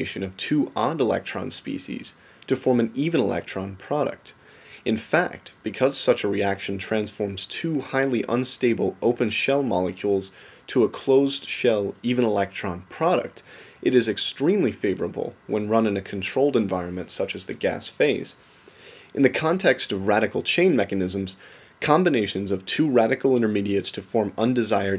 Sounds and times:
Speech: 0:00.0 - 0:18.4, 0:19.2 - 0:24.9.

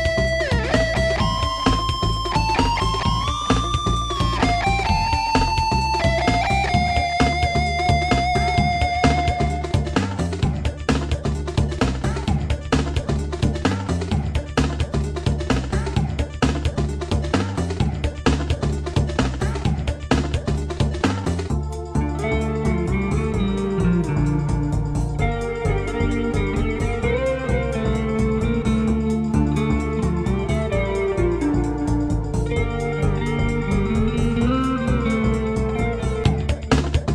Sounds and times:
Electric guitar: 0:00.0 - 0:10.5, 0:21.8 - 0:37.1.

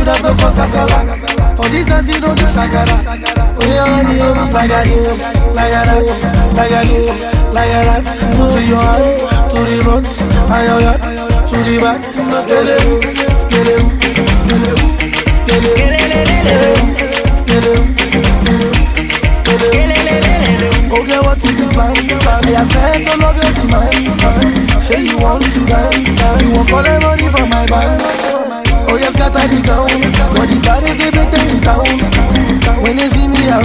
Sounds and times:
Afrobeat: 0:00.0 - 0:33.6.

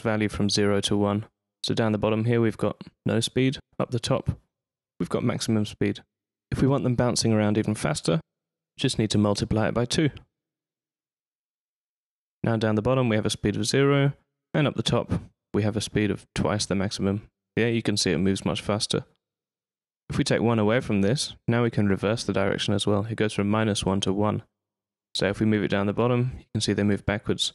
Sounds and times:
Speech: 0:00.0 - 0:04.4, 0:05.0 - 0:10.3, 0:12.4 - 0:19.2, 0:20.1 - 0:24.5, 0:25.2 - 0:27.5.

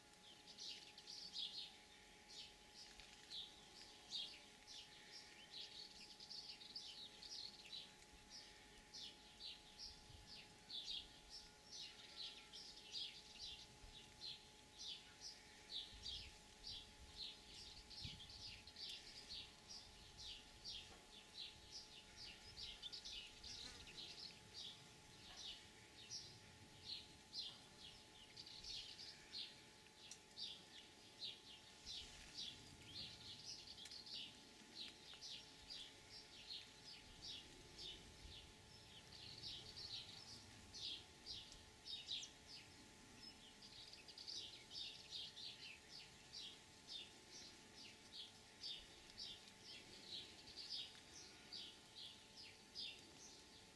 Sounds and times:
Outside, rural or natural: 0:00.0 - 0:53.7.

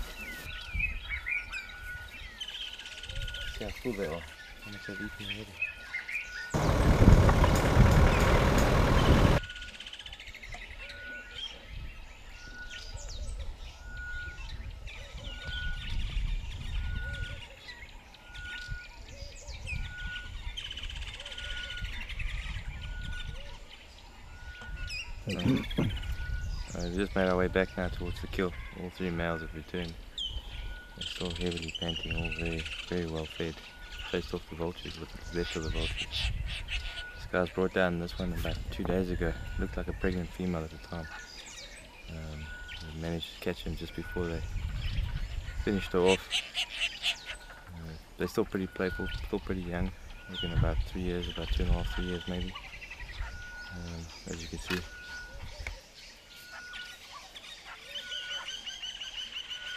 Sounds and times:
Chirp, tweet: 0:00.0 - 0:06.9, 0:08.1 - 0:59.7.

